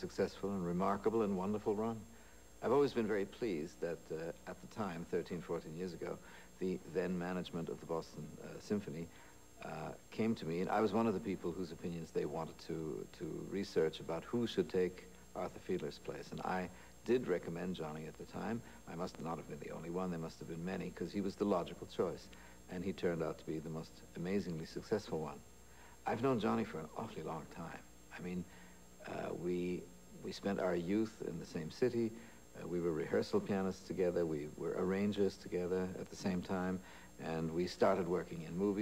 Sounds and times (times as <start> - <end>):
Male speech, man speaking: 0.0 - 25.4, 26.0 - 38.8
Narration, monologue: 0.0 - 38.8.